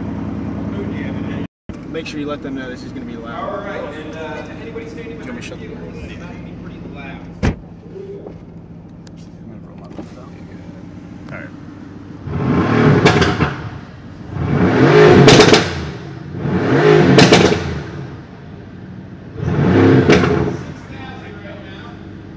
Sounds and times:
Car: 0.0s - 22.3s
Speech: 0.7s - 7.4s, 20.8s - 22.0s.

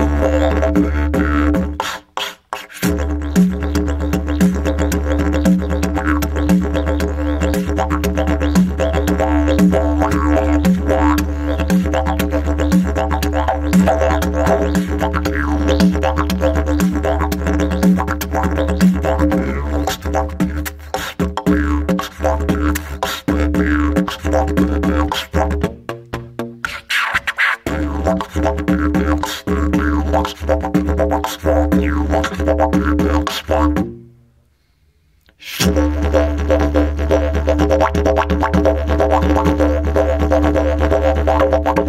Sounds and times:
Didgeridoo: 0.0s - 34.2s, 35.5s - 41.8s.

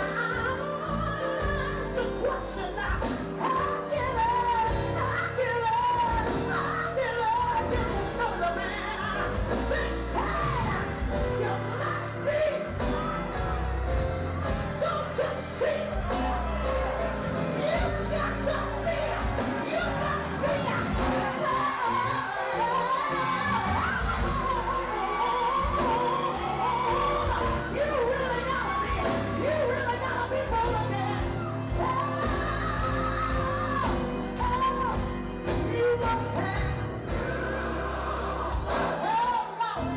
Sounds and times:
Inside, public space: 0.0s - 39.9s
Music: 0.0s - 39.9s
Singing: 0.0s - 39.9s.

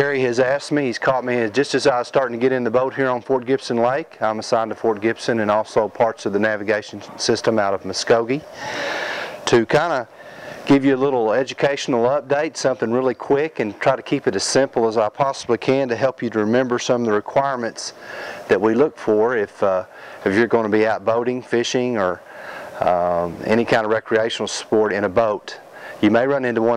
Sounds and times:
Speech: 0.0s - 8.5s, 9.4s - 10.1s, 10.7s - 22.2s, 22.8s - 26.7s.

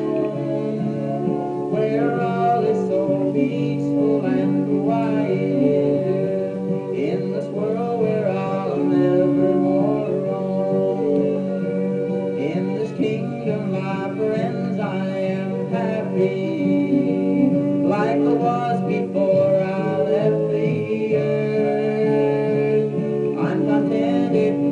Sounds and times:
Male singing: 0.0s - 24.7s
Music: 0.0s - 24.7s.

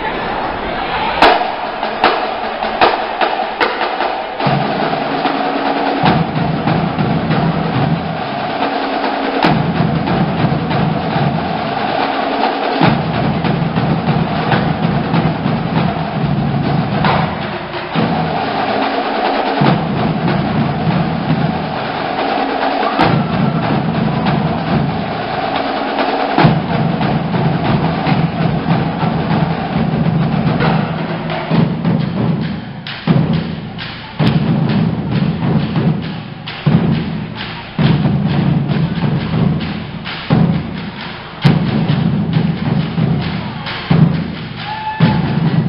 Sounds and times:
Music: 0.0s - 45.6s.

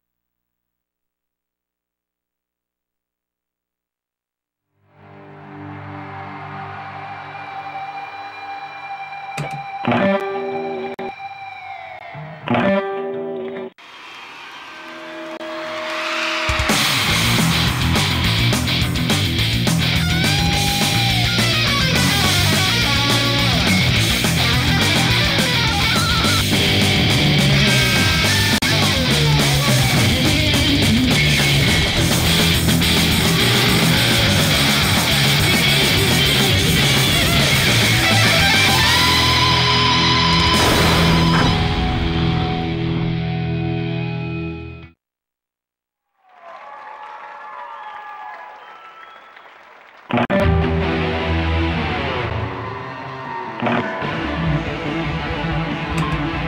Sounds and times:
Electric guitar: 9.3s - 11.2s, 12.1s - 13.7s, 14.8s - 44.9s, 50.1s - 56.4s.

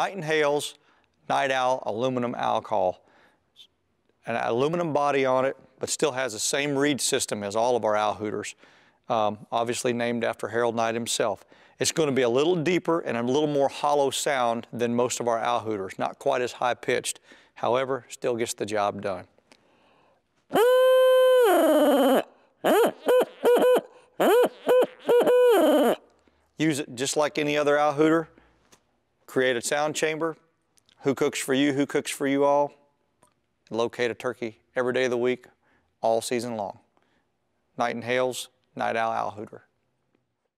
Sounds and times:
Speech: 0.0s - 3.0s, 4.2s - 19.3s, 26.6s - 28.3s, 29.3s - 30.4s, 31.0s - 32.8s, 33.7s - 36.9s, 37.8s - 39.7s.

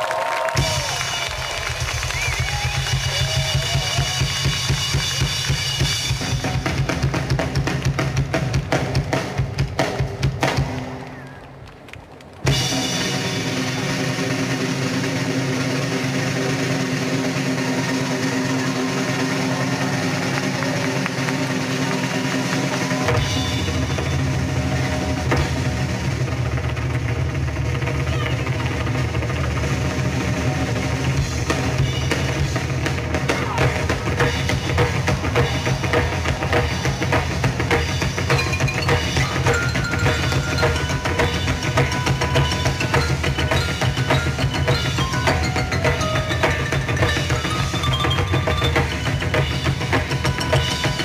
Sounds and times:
Music: 0.5s - 11.4s, 12.4s - 51.0s.

